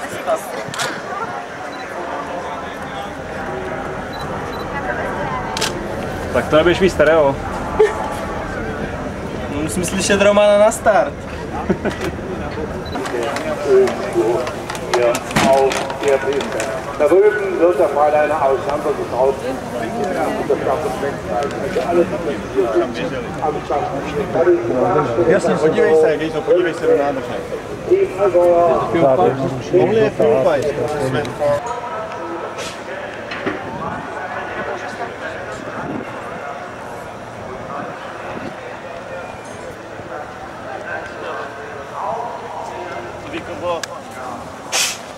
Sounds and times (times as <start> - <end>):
Speech: 0.0 - 44.7.